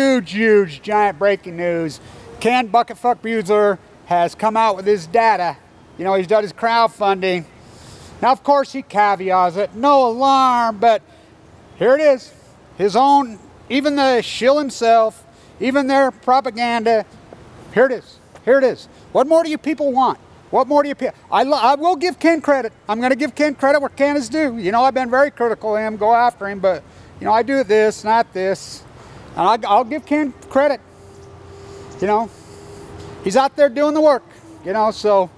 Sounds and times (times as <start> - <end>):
Speech: 0.0 - 7.5, 8.2 - 11.0, 11.8 - 17.1, 17.7 - 30.8, 32.0 - 32.3, 33.2 - 35.3.